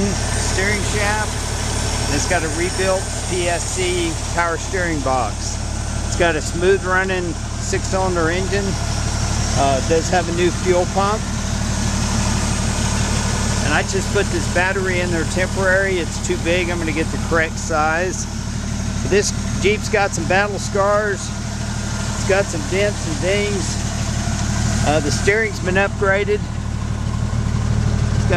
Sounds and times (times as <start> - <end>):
Speech: 0.0 - 1.4, 2.1 - 8.8, 9.5 - 11.3, 13.6 - 18.3, 19.0 - 21.4, 22.2 - 23.8, 24.8 - 26.5
Vehicle: 0.0 - 28.3.